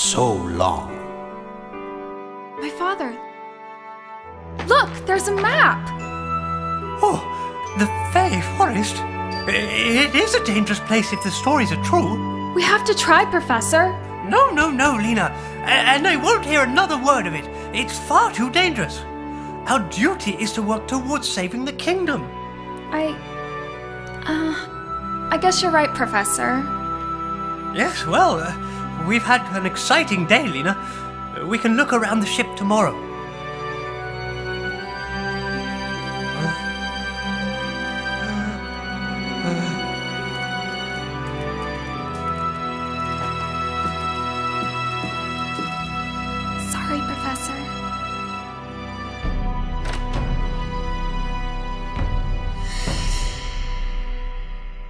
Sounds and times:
Theme music: 0.0s - 54.8s.

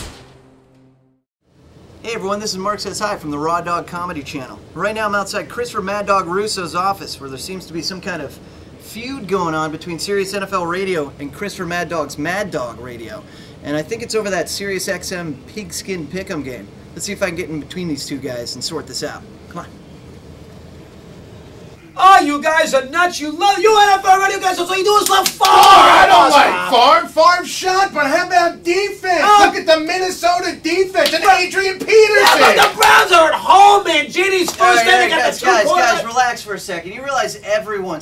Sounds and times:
Speech: 2.0s - 19.8s, 21.9s - 38.0s.

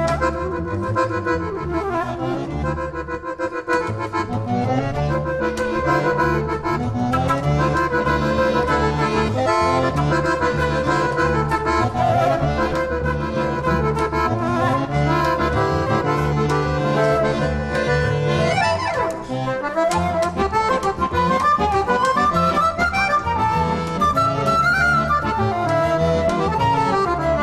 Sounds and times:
Flute: 0.0s - 2.6s, 7.1s - 27.4s
Accordion: 0.0s - 27.4s.

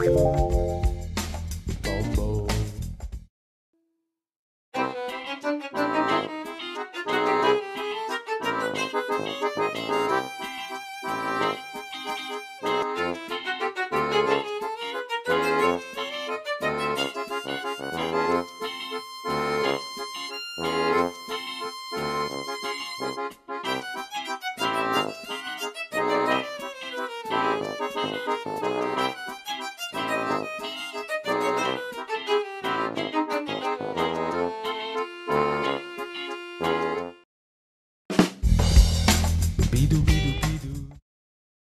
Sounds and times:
Music: 0.0s - 3.9s, 4.8s - 37.3s, 38.1s - 41.0s.

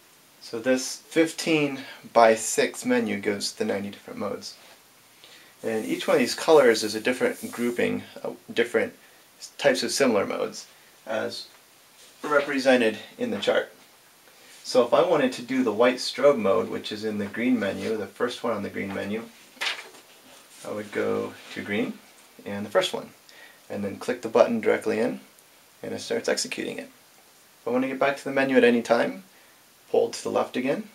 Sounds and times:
Speech: 0.4s - 4.6s, 5.6s - 11.6s, 12.2s - 13.8s, 14.6s - 19.4s, 20.6s - 27.0s, 27.6s - 29.3s, 29.9s - 30.9s.

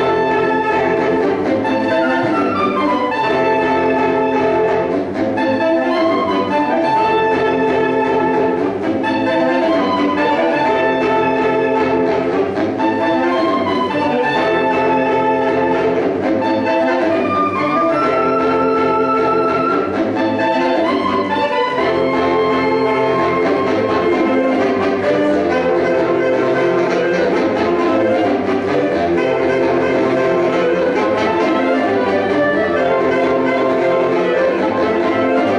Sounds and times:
Orchestra: 0.0s - 35.5s
Saxophone: 0.0s - 35.5s.

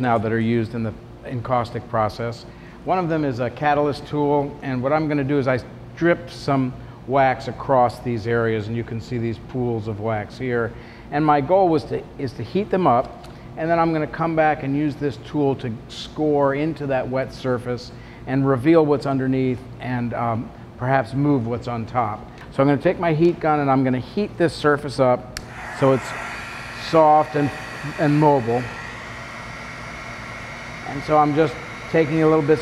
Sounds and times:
Speech: 0.0s - 26.1s, 26.8s - 28.7s, 30.8s - 32.6s.

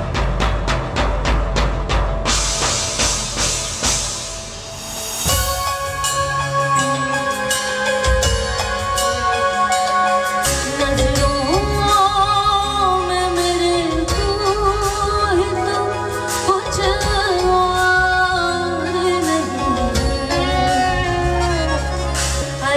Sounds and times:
Music: 0.0s - 22.7s.

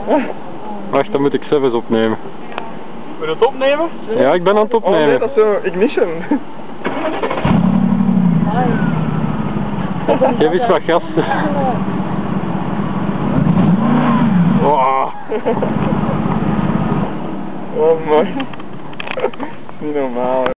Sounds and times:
Car: 0.0s - 20.5s
Medium engine (mid frequency): 5.8s - 20.5s
Idling: 15.6s - 17.1s.

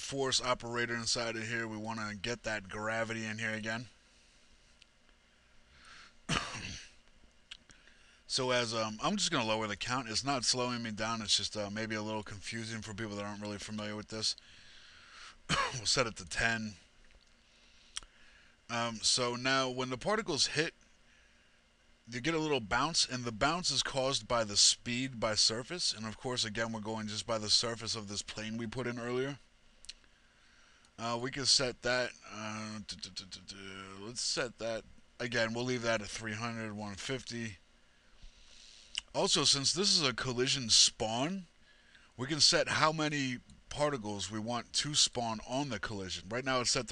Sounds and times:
Speech: 0.0s - 4.0s, 8.3s - 14.4s, 15.5s - 16.8s, 18.7s - 20.8s, 22.1s - 29.5s, 31.0s - 37.6s, 39.0s - 41.5s, 42.2s - 46.9s.

